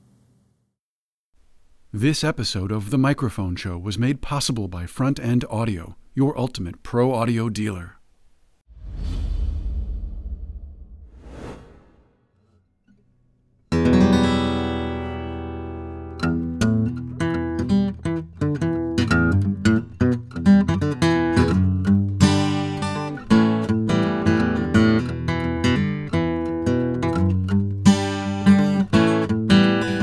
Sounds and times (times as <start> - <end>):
Speech: 1.9 - 8.0.